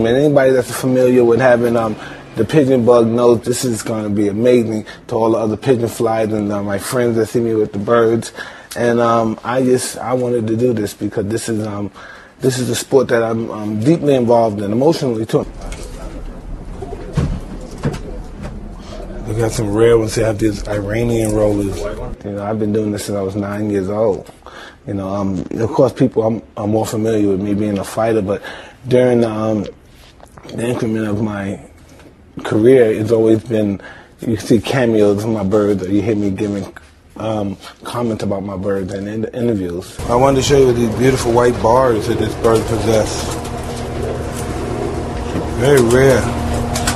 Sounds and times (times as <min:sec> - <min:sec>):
Speech: 0:00.0 - 0:16.4, 0:19.0 - 0:29.8, 0:30.4 - 0:31.7, 0:32.4 - 0:43.4, 0:45.5 - 0:46.4.